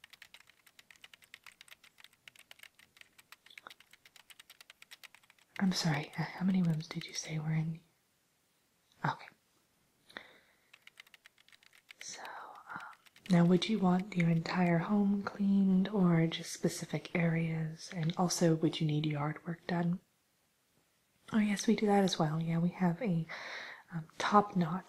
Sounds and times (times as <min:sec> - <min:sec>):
Whispering: 0:05.6 - 0:07.8, 0:09.0 - 0:09.4, 0:12.0 - 0:15.5
Speech: 0:05.6 - 0:07.9, 0:09.0 - 0:09.4, 0:12.0 - 0:20.0, 0:21.3 - 0:23.3, 0:23.9 - 0:24.8.